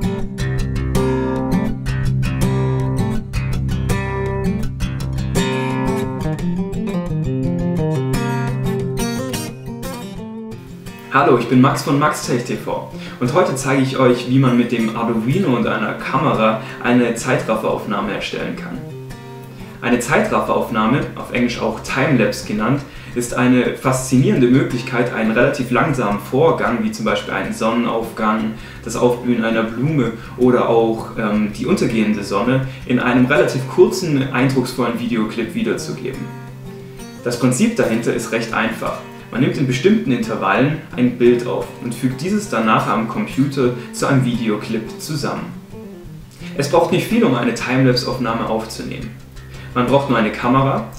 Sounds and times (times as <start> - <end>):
Music: 0.0 - 50.9
Speech: 11.1 - 18.9, 19.8 - 36.3, 37.2 - 45.6, 46.5 - 49.2, 49.8 - 50.9.